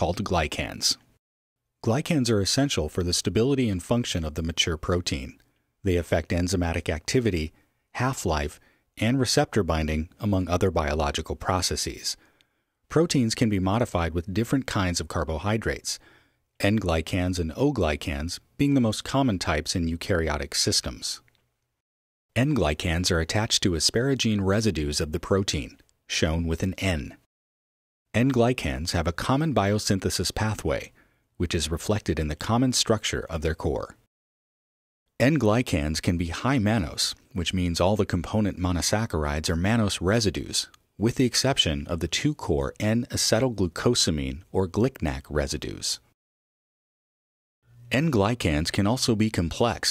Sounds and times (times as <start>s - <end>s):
Speech: 0.0s - 1.1s, 1.8s - 12.2s, 12.9s - 16.0s, 16.6s - 21.3s, 22.4s - 27.3s, 28.1s - 34.1s, 35.2s - 46.2s, 47.9s - 49.9s.